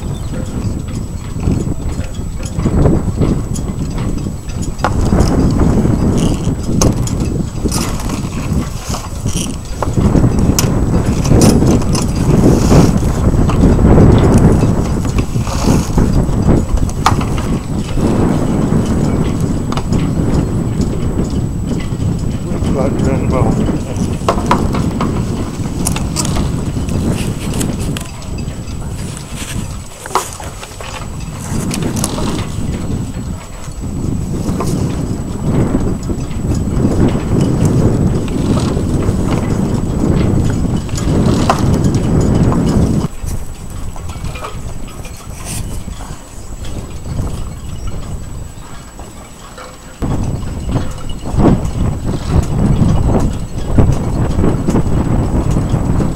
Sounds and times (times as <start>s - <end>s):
Speech: 22.5s - 24.1s.